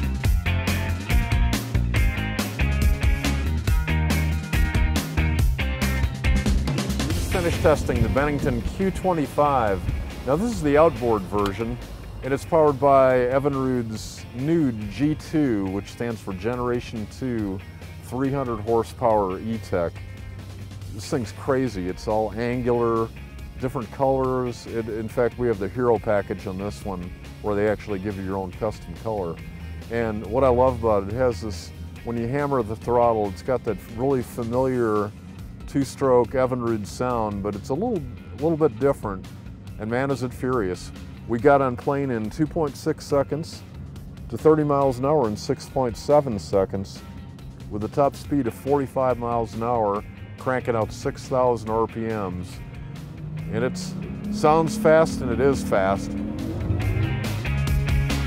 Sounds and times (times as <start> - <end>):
Music: 0.0 - 58.2
Speech: 7.3 - 20.0, 20.9 - 35.1, 35.7 - 39.2, 39.8 - 43.6, 44.3 - 47.0, 47.7 - 52.6, 53.5 - 56.2.